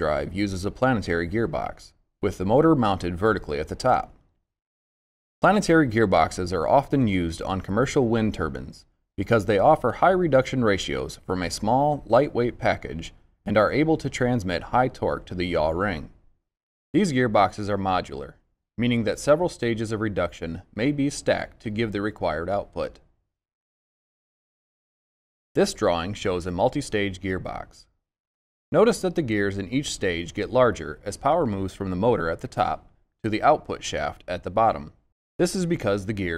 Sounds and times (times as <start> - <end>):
Speech: 0.0 - 4.2, 5.4 - 16.2, 17.0 - 23.1, 25.6 - 27.9, 28.8 - 36.3.